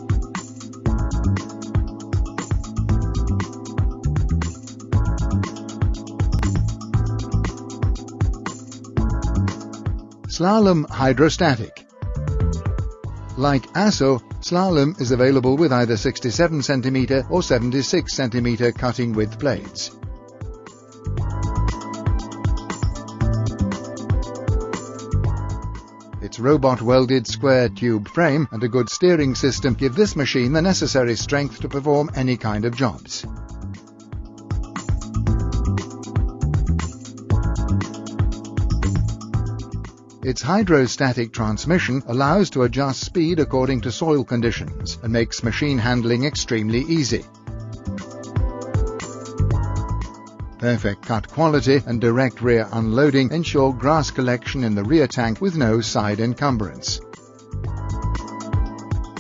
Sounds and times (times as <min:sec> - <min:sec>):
Music: 0:00.0 - 0:59.2
Speech: 0:10.3 - 0:11.8, 0:13.4 - 0:20.0, 0:26.2 - 0:33.3, 0:40.2 - 0:47.3, 0:50.6 - 0:57.0.